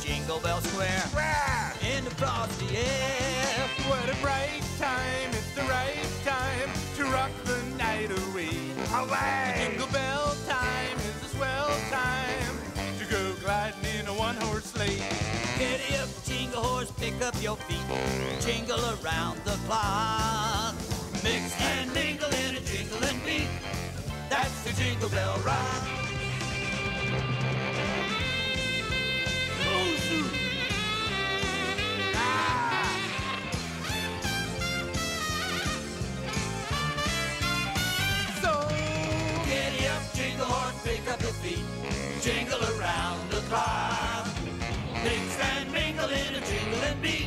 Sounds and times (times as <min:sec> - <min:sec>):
Music: 0:00.0 - 0:47.2.